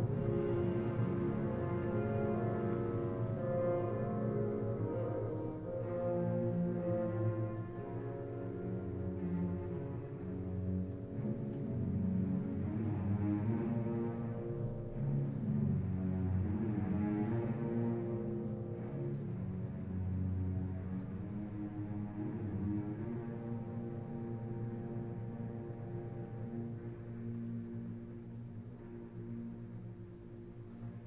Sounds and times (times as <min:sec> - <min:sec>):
Violin, fiddle: 0:00.0 - 0:31.0.